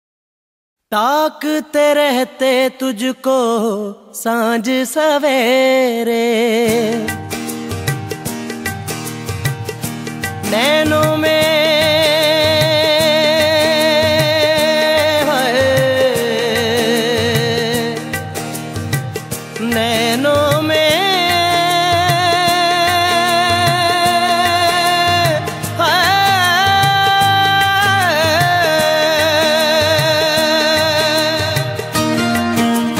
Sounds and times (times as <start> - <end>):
Music of Bollywood: 0.9 - 32.9.